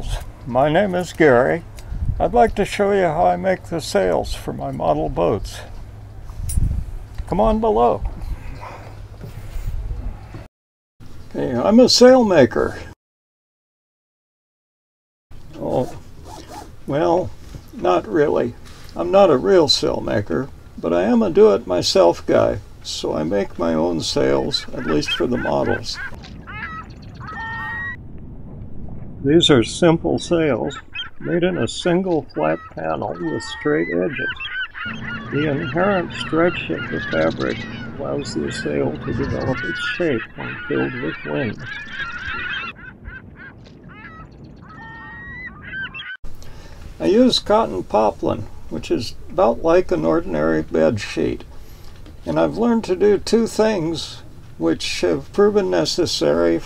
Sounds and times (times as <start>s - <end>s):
Speech: 0.0s - 1.6s, 2.2s - 5.7s, 7.3s - 8.1s, 11.3s - 13.0s, 15.6s - 16.0s, 16.9s - 26.0s, 29.2s - 34.4s, 35.2s - 41.7s, 47.0s - 51.5s, 52.2s - 56.6s.